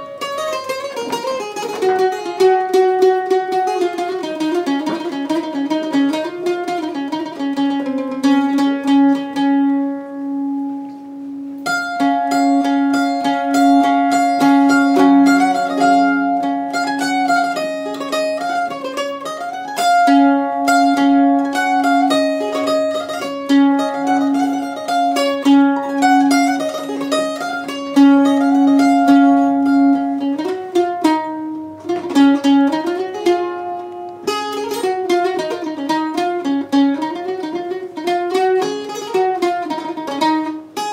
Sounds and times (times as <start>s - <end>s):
Mandolin: 0.0s - 40.9s.